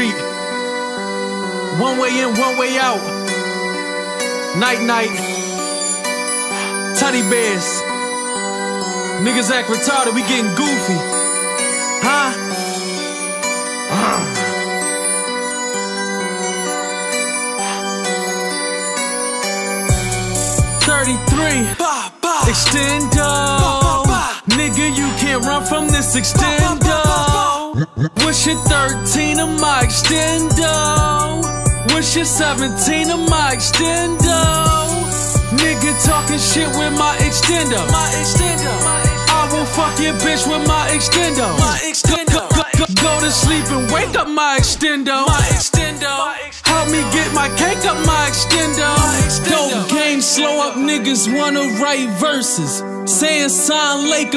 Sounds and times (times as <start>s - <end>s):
Soundtrack music: 0.0s - 21.8s, 28.2s - 41.9s, 42.5s - 44.5s, 45.4s - 54.3s
Theme music: 0.0s - 21.8s, 28.2s - 41.9s, 42.7s - 44.5s, 45.8s - 54.2s
Background music: 0.0s - 54.3s
New-age music: 0.0s - 54.3s.